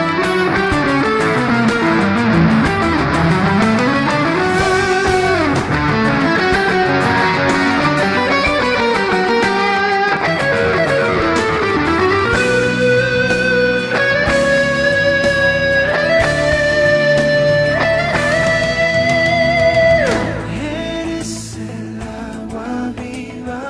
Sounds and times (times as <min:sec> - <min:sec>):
Electric guitar: 0:00.0 - 0:23.6
Strum: 0:00.0 - 0:23.6.